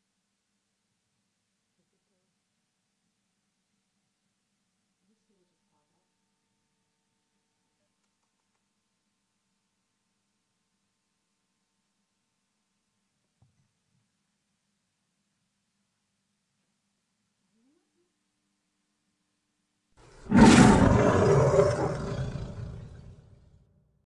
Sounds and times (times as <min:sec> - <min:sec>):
Roar: 0:20.0 - 0:23.7.